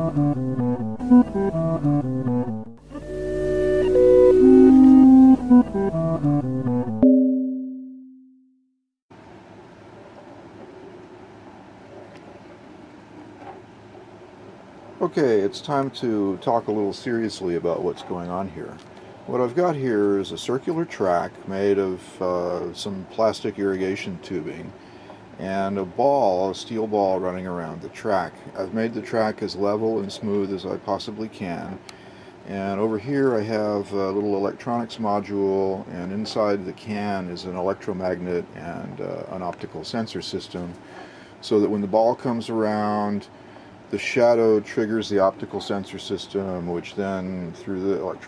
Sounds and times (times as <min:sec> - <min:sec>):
Music: 0:00.0 - 0:08.3
Speech: 0:15.0 - 0:24.8, 0:25.4 - 0:31.8, 0:32.5 - 0:40.8, 0:41.4 - 0:43.3, 0:43.9 - 0:48.2.